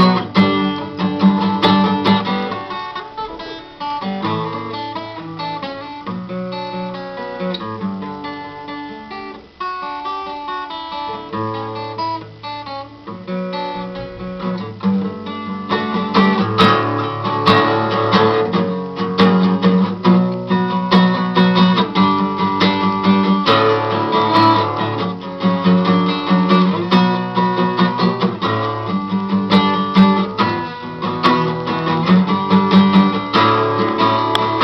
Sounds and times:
Acoustic guitar: 0:00.0 - 0:34.6
Strum: 0:00.0 - 0:34.6.

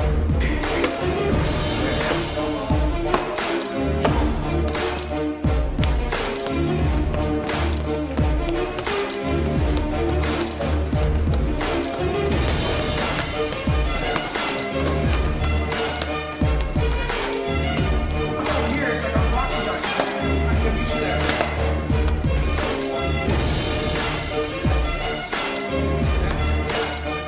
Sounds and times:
Music: 0:00.0 - 0:27.2
Speech: 0:18.4 - 0:21.4.

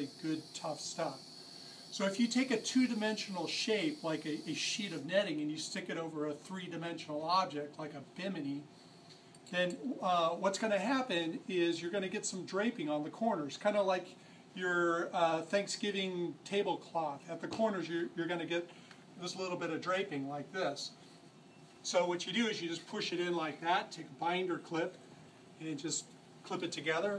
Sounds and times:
Speech: 0:00.0 - 0:01.2, 0:02.0 - 0:08.7, 0:09.5 - 0:21.0, 0:21.8 - 0:25.0, 0:25.6 - 0:27.1.

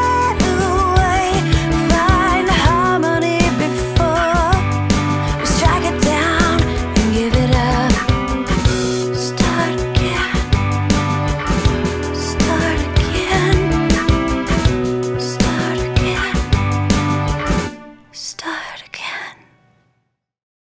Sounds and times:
Music: 0:00.0 - 0:20.3.

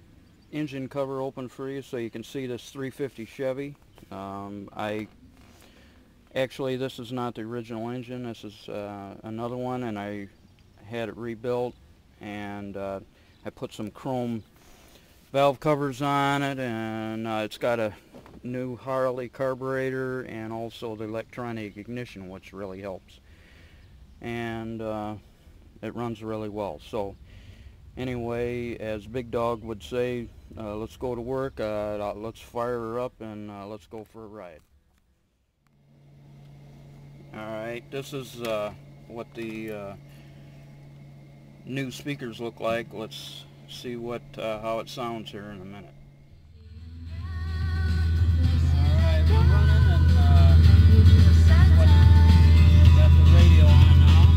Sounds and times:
Speech: 0:00.5 - 0:05.1, 0:06.3 - 0:14.4, 0:15.3 - 0:23.2, 0:24.2 - 0:25.2, 0:25.8 - 0:27.2, 0:28.0 - 0:34.6, 0:37.3 - 0:40.0, 0:41.6 - 0:45.9, 0:53.0 - 0:54.0.

